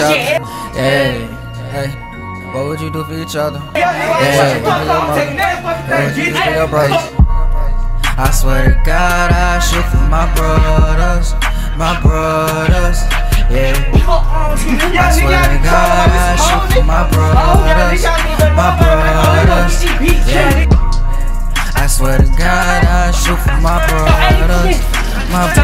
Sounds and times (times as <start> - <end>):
Music: 0.0 - 25.6.